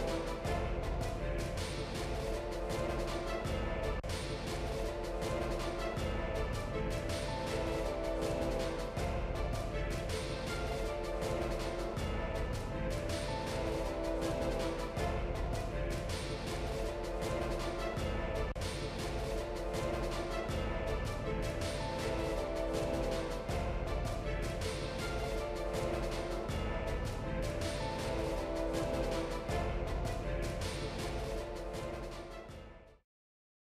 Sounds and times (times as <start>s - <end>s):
Music: 0.0s - 33.0s.